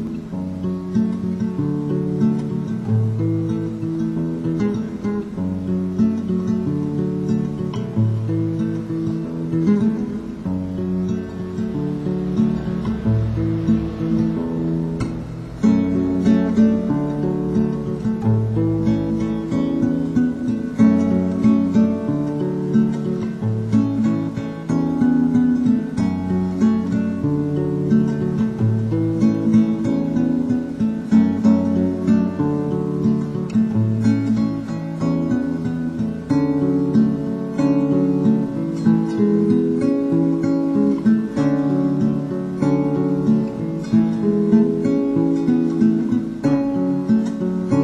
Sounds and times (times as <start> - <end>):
Guitar: 0.0 - 47.8.